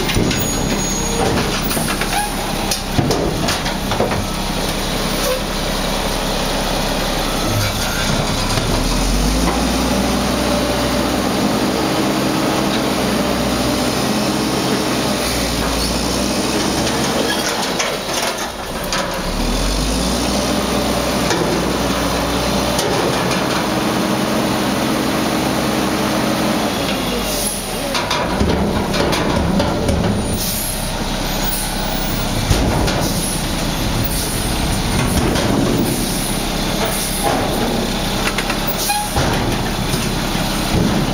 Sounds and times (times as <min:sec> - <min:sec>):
Truck: 0:00.0 - 0:41.1.